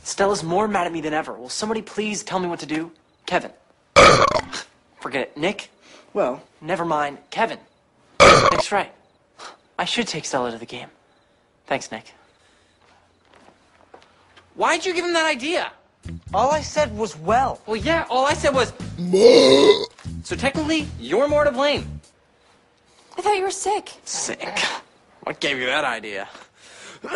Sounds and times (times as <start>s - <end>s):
Speech: 0.0s - 3.6s, 5.0s - 7.7s, 9.8s - 11.0s, 11.7s - 12.2s, 14.6s - 18.8s, 20.2s - 21.9s, 23.2s - 26.4s
Burping, eructation: 4.0s - 4.6s, 8.2s - 8.6s, 19.0s - 20.0s
Music: 16.0s - 19.2s, 19.8s - 22.2s.